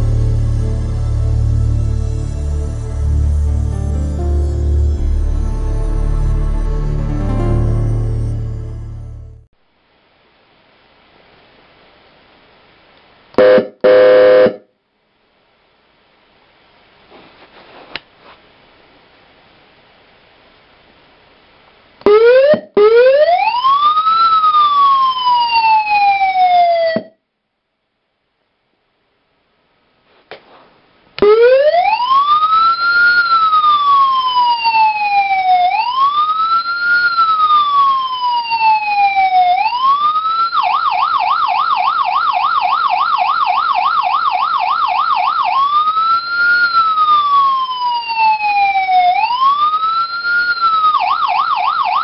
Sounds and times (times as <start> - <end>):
Siren: 13.4 - 14.6, 22.0 - 27.2, 31.2 - 52.0.